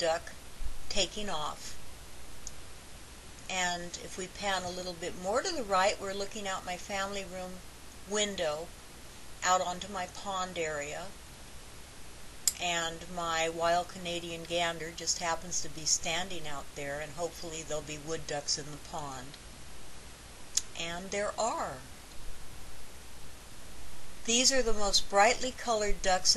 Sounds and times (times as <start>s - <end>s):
Speech: 0.0s - 1.8s, 3.5s - 8.7s, 9.4s - 11.1s, 12.5s - 19.4s, 20.6s - 21.9s, 24.3s - 26.3s.